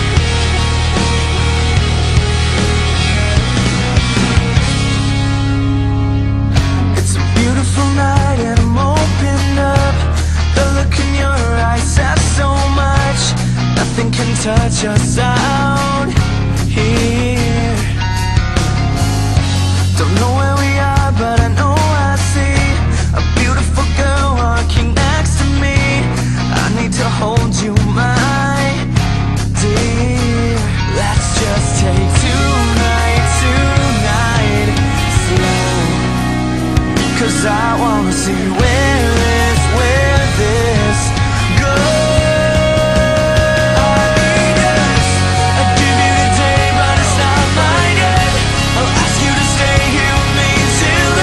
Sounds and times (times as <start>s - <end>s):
Music: 0.0s - 51.2s.